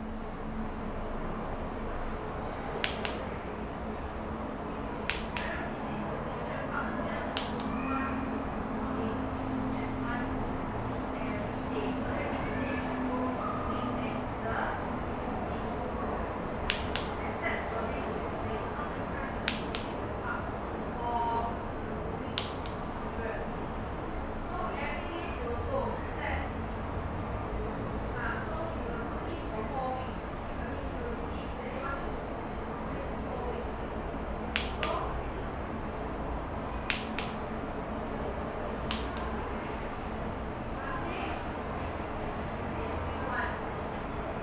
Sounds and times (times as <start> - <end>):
Speech: 5.1 - 23.6, 24.4 - 26.7, 27.4 - 35.5, 40.7 - 44.4.